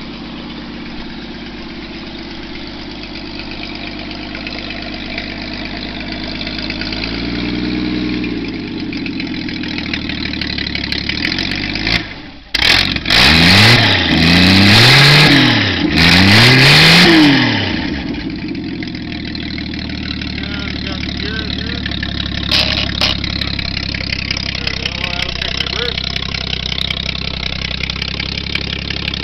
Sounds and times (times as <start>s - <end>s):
Idling: 0.0s - 13.2s, 17.4s - 29.2s
Medium engine (mid frequency): 0.0s - 29.2s
Speech: 20.4s - 21.9s, 24.6s - 26.0s.